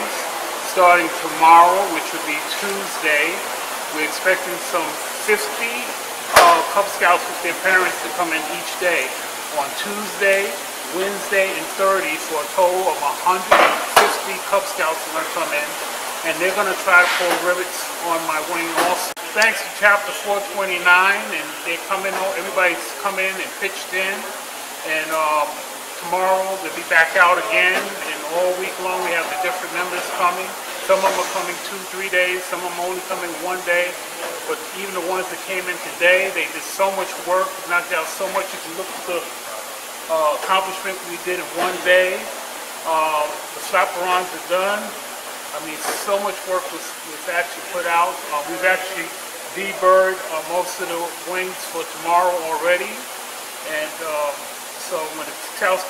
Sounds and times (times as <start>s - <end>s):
Speech: 0.0s - 39.3s, 40.1s - 55.8s.